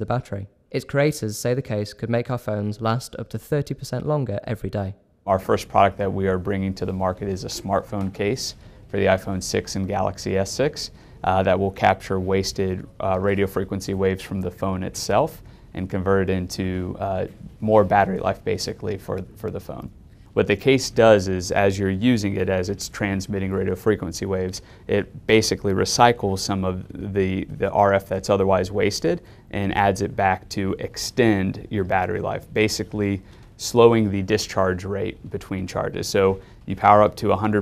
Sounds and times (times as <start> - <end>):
Speech: 0.0 - 37.6.